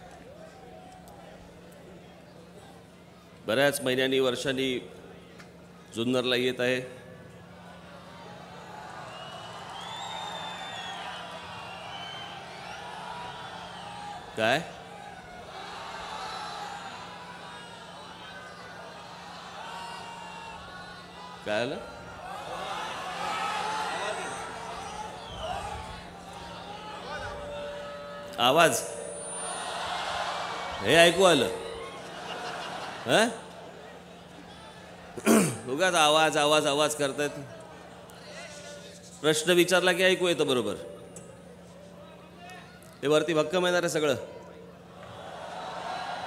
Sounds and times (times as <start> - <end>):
Male speech, man speaking: 3.5 - 4.9, 5.9 - 7.0, 14.4 - 14.7, 21.5 - 21.8, 28.4 - 28.9, 30.8 - 31.6, 33.1 - 33.4, 35.6 - 37.5, 38.2 - 40.9, 42.1 - 44.3.